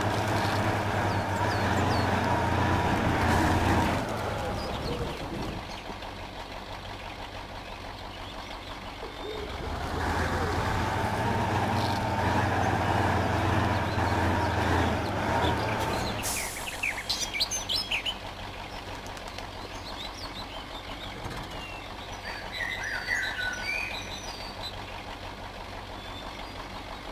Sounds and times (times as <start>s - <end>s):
Chirp, tweet: 0.4s - 2.2s, 4.6s - 6.3s, 6.9s - 9.7s, 13.6s - 27.1s.